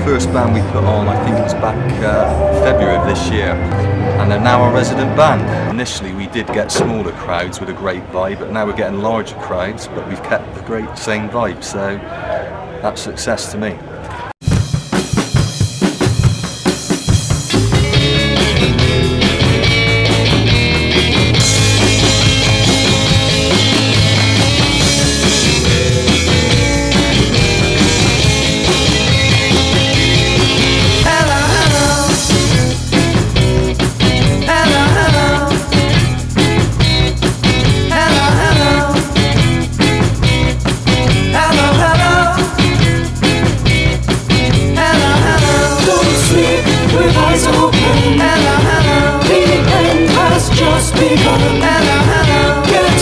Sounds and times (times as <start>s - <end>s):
Rhythm and blues: 14.4s - 53.0s
Dance music: 17.3s - 53.0s.